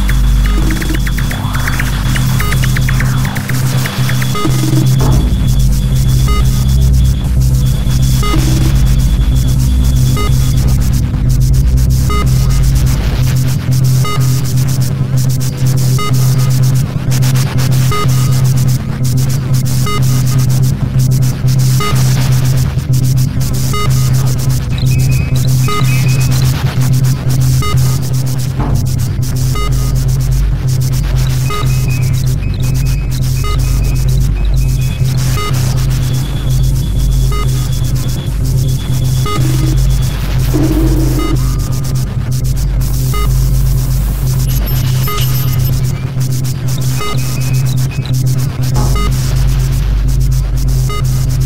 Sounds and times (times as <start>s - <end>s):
Ambient music: 0.0s - 17.1s, 23.0s - 44.5s
White noise: 0.0s - 51.4s.